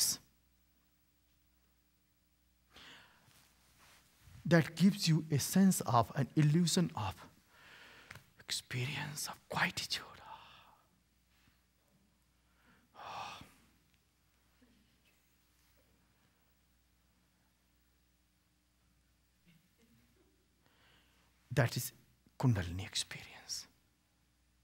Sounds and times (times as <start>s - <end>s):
Speech: 0.0s - 0.2s, 4.4s - 7.3s, 21.5s - 23.7s
Sigh: 12.7s - 13.8s.